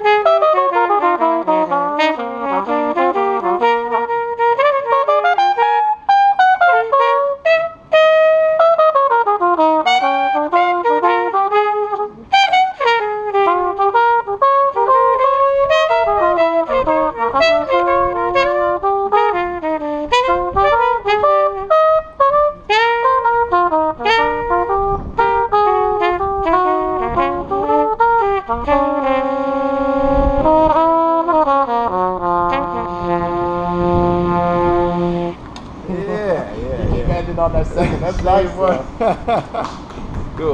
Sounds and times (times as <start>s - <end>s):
Trumpet: 0.0s - 35.6s.